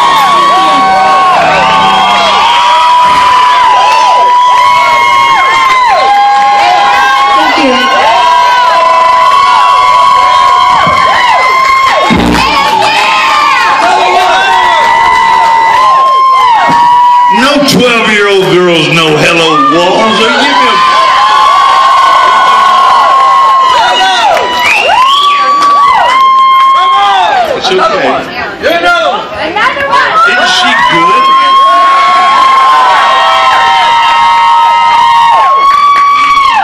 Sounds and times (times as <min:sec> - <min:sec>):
Crowd: 0:00.0 - 0:36.6.